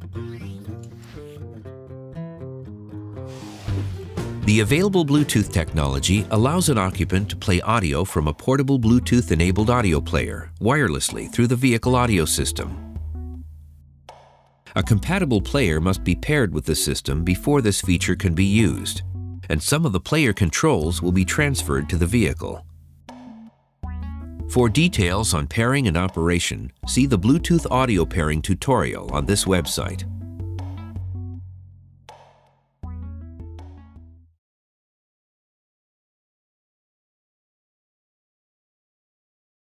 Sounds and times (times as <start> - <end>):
Speech: 4.5 - 12.8, 14.7 - 22.6, 24.5 - 30.1.